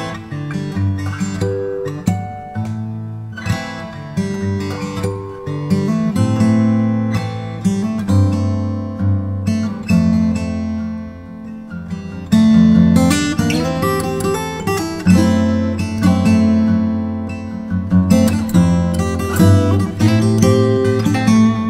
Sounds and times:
Strum: 1.0s - 21.6s.

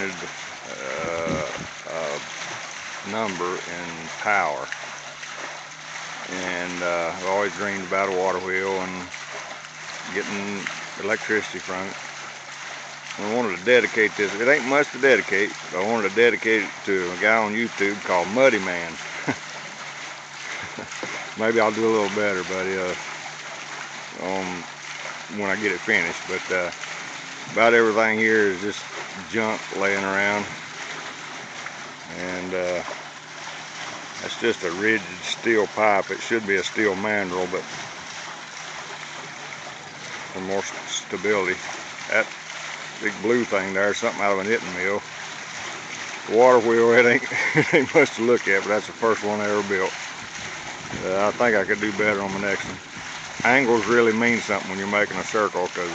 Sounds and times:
Speech: 0.0s - 2.3s, 3.0s - 4.8s, 6.3s - 9.1s, 10.0s - 12.0s, 13.1s - 19.1s, 21.3s - 23.0s, 24.2s - 24.7s, 25.3s - 26.7s, 27.5s - 30.5s, 32.1s - 32.9s, 34.2s - 37.6s, 40.3s - 42.3s, 43.0s - 45.0s, 46.3s - 50.0s, 51.0s - 52.8s, 53.4s - 55.9s
Trickle, dribble: 0.0s - 55.9s.

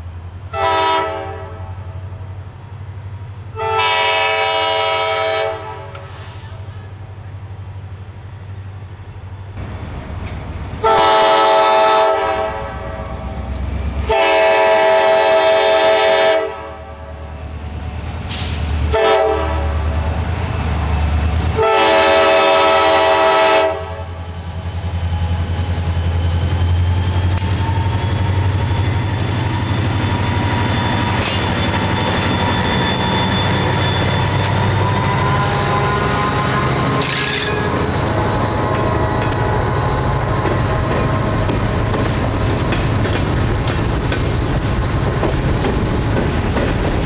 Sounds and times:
Outside, rural or natural: 0.0s - 47.0s
Railroad car, train wagon: 0.0s - 47.0s
Train whistle: 0.5s - 1.9s, 3.6s - 6.6s, 10.8s - 13.4s, 14.0s - 17.2s, 18.3s - 20.0s, 21.4s - 24.2s, 32.1s - 37.9s.

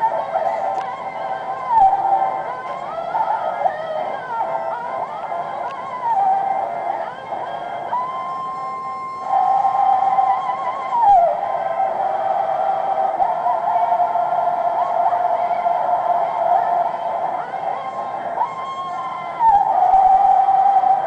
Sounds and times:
Choir: 9.3s - 21.0s.

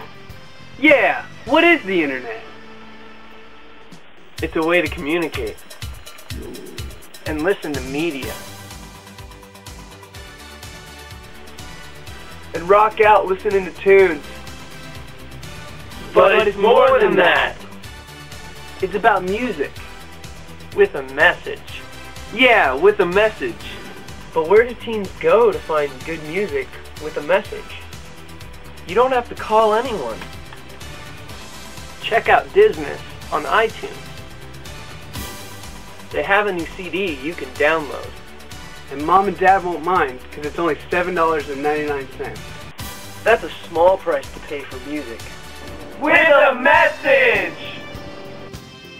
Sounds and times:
Music: 0.0s - 48.9s
Speech: 0.8s - 2.5s, 4.4s - 5.6s, 6.4s - 8.4s, 12.6s - 14.3s, 16.2s - 17.6s, 18.8s - 19.8s, 20.8s - 23.8s, 24.4s - 27.8s, 28.9s - 30.2s, 32.0s - 34.0s, 36.1s - 38.1s, 38.9s - 42.4s, 43.3s - 45.3s, 46.0s - 47.8s.

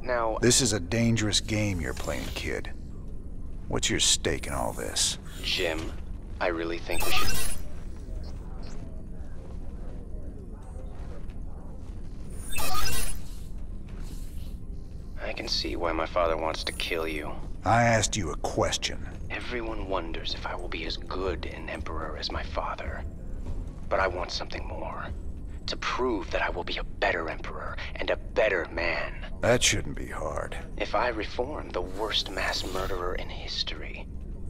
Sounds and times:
Speech: 15.2s - 23.0s, 25.7s - 34.0s.

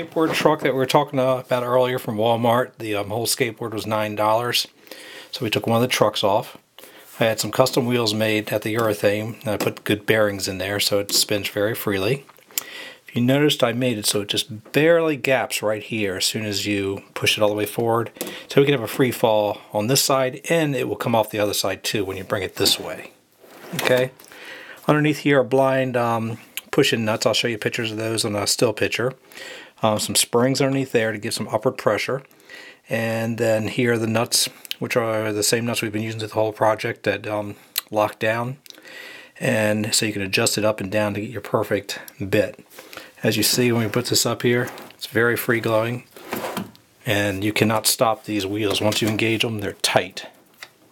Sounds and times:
Speech: 0.0s - 4.7s, 5.3s - 6.6s, 7.2s - 12.3s, 13.1s - 24.2s, 24.8s - 29.2s, 29.8s - 32.3s, 32.9s - 38.7s, 39.4s - 42.6s, 43.2s - 46.1s, 47.0s - 50.4s.

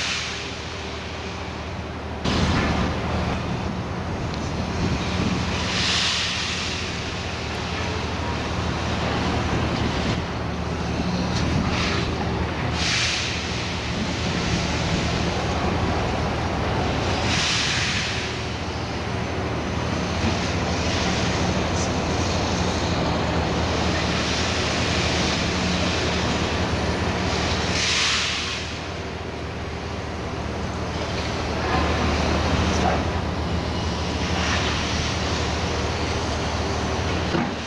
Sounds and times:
Outside, urban or manmade: 0.0s - 37.6s
Vehicle: 0.0s - 37.6s.

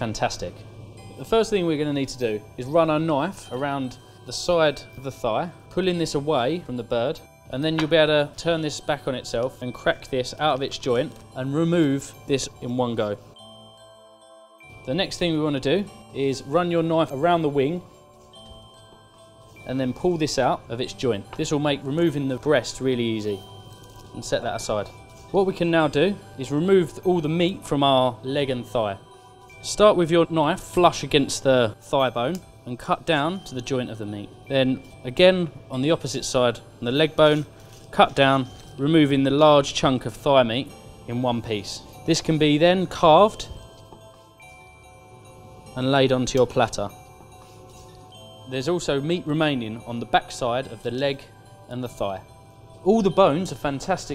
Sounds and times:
Music: 0.0s - 54.1s
Speech: 24.2s - 29.0s, 45.8s - 47.0s, 48.5s - 52.3s, 52.9s - 54.1s.

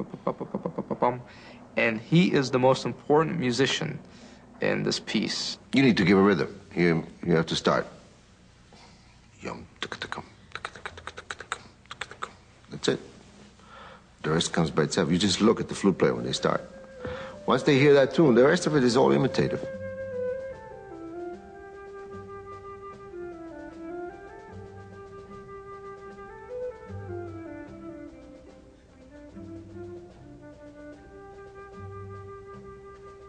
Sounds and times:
Speech: 1.8s - 4.0s, 4.6s - 8.0s, 9.4s - 13.1s, 14.2s - 16.7s, 17.4s - 19.7s.

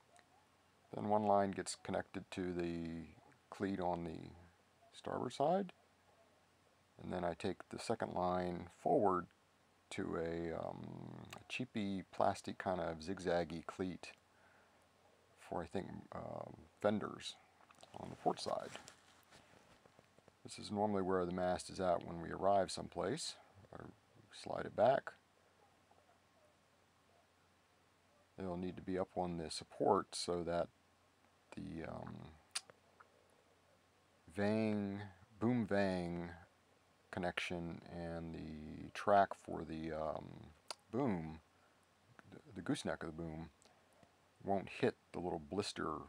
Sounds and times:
Speech: 0.9s - 5.8s, 7.0s - 9.3s, 9.9s - 14.2s, 15.4s - 18.9s, 20.4s - 25.2s, 28.4s - 30.7s, 31.5s - 32.7s, 34.3s - 36.5s, 37.1s - 41.5s, 42.2s - 43.6s, 44.4s - 46.0s.

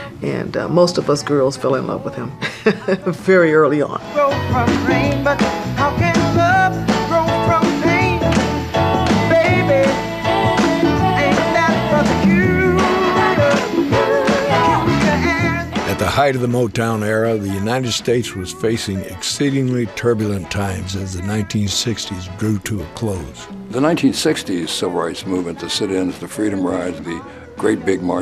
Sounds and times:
Speech: 0.2s - 4.0s, 15.9s - 28.2s
Blues: 3.8s - 28.2s.

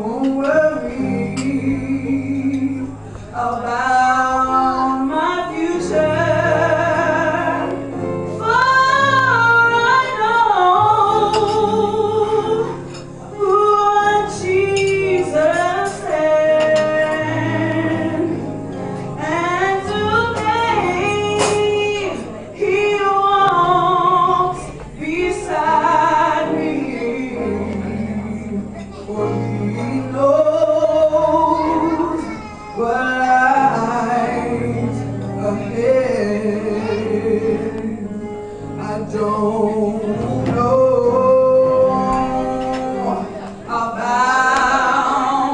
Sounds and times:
Female singing: 0.0s - 18.4s, 19.2s - 45.5s
Music: 0.0s - 45.5s.

